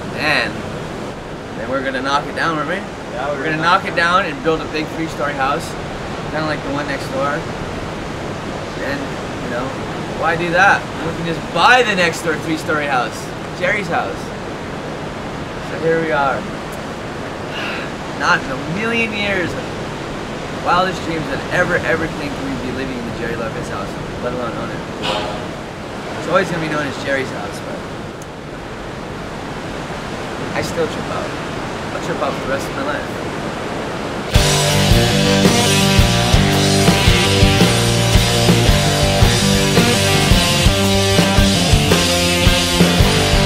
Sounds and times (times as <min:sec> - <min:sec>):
Outside, rural or natural: 0:00.0 - 0:43.4
Speech: 0:00.1 - 0:00.6, 0:01.6 - 0:07.5, 0:08.7 - 0:14.4, 0:15.6 - 0:16.5, 0:18.2 - 0:19.7, 0:20.6 - 0:25.5, 0:26.2 - 0:27.9, 0:30.4 - 0:33.2
Music: 0:34.4 - 0:43.4.